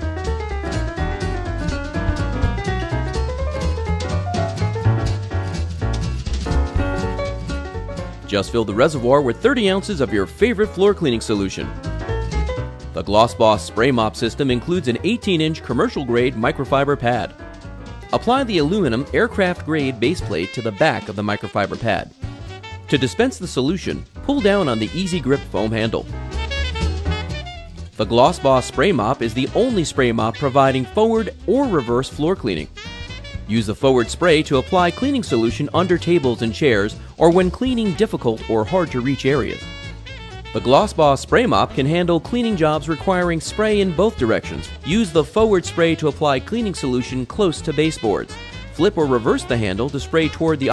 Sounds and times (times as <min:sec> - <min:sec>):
Music: 0:00.0 - 0:50.7
Speech: 0:08.3 - 0:11.7, 0:13.0 - 0:17.3, 0:18.1 - 0:22.1, 0:22.9 - 0:26.1, 0:28.0 - 0:32.7, 0:33.5 - 0:39.6, 0:40.6 - 0:50.7.